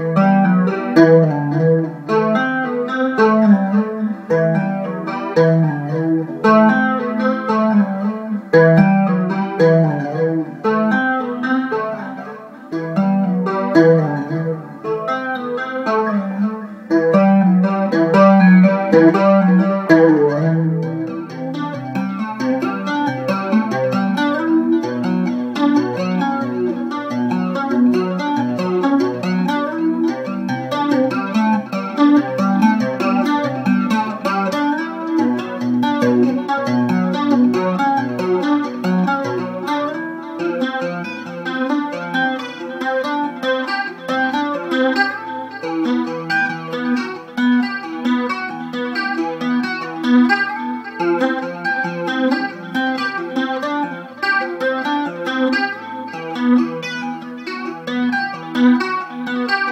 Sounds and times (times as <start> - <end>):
Strum: 0.0 - 59.7.